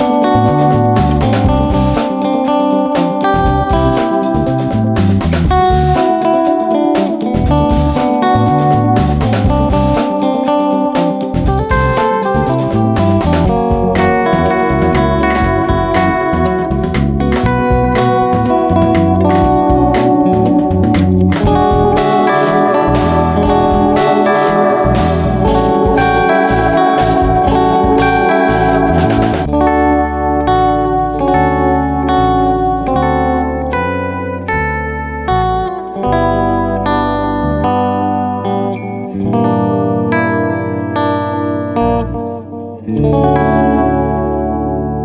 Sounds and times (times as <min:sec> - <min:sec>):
Musical instrument: 0:05.8 - 0:31.2.